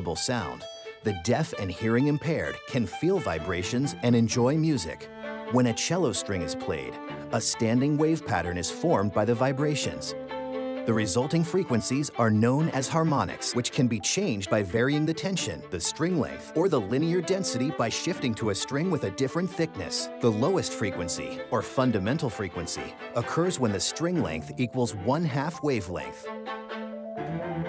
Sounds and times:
Speech: 0.0s - 10.2s, 10.9s - 26.2s
Music: 0.0s - 27.6s.

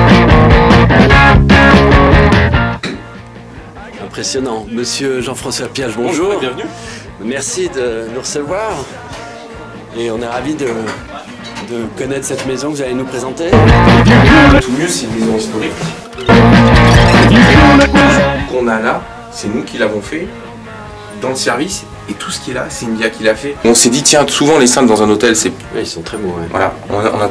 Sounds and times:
Music: 0.0s - 27.3s
Speech: 3.8s - 8.9s, 14.6s - 16.0s, 21.2s - 27.3s.

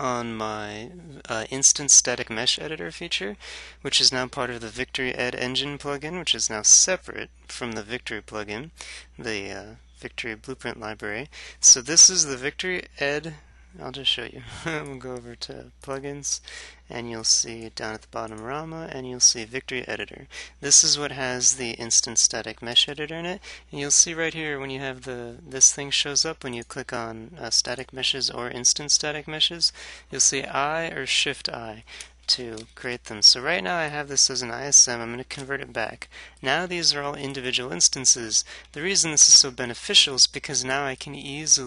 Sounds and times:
Speech: 0.0s - 41.6s.

